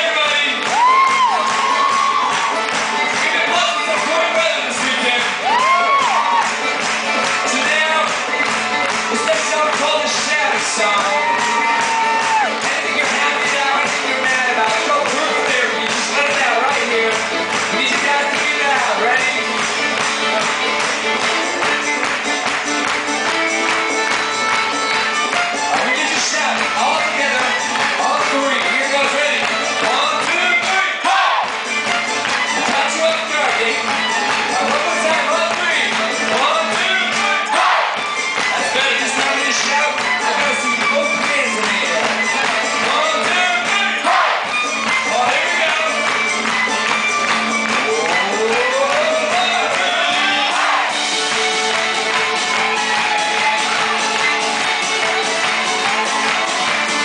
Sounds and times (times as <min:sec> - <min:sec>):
Violin, fiddle: 0:14.6 - 0:30.5, 0:38.0 - 0:43.6.